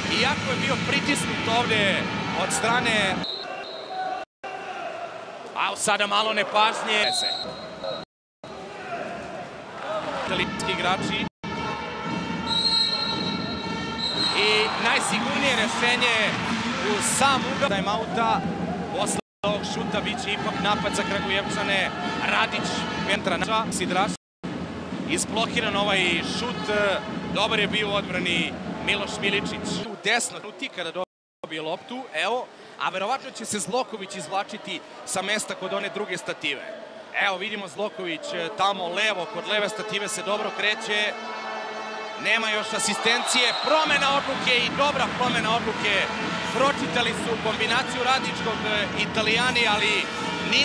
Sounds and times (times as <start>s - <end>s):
Speech: 0.0s - 3.2s, 5.6s - 7.4s, 9.9s - 11.3s, 14.4s - 18.4s, 19.0s - 24.2s, 25.1s - 41.2s, 42.2s - 50.6s
Music: 10.4s - 29.7s.